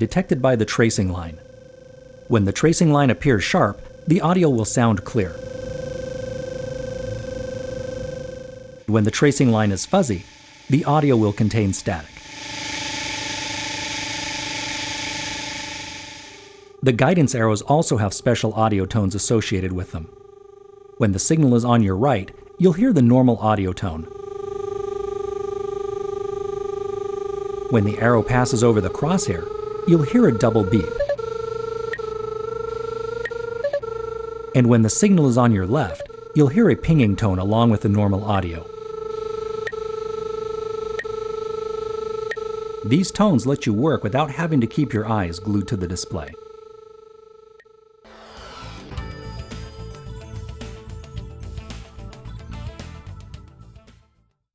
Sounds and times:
Speech: 0.0 - 1.4, 2.3 - 5.4, 8.9 - 12.1, 16.8 - 20.1, 21.0 - 24.1, 27.7 - 31.0, 34.6 - 38.7, 42.8 - 46.4.

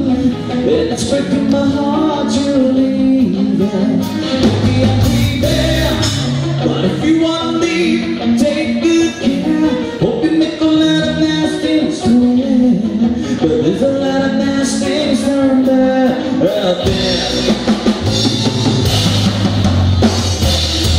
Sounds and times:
Music: 0.0 - 20.9.

